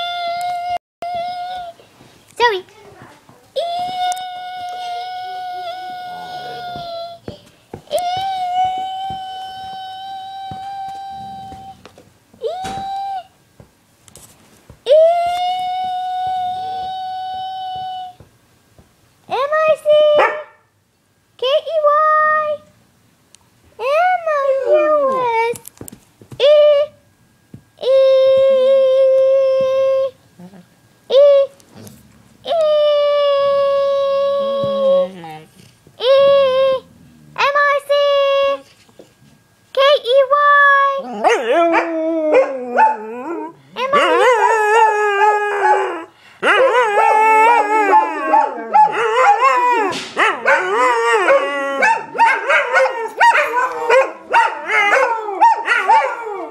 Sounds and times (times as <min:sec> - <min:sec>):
Speech: 0:02.4 - 0:07.2, 0:19.3 - 0:20.3, 0:23.8 - 0:25.6, 0:32.5 - 0:38.7, 0:39.8 - 0:41.1, 0:43.8 - 0:44.7
Dog: 0:47.9 - 0:56.5.